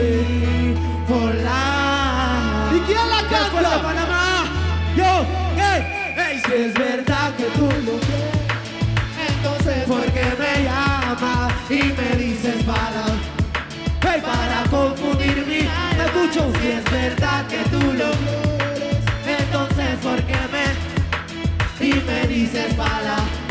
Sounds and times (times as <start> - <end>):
Exciting music: 2.5 - 23.5.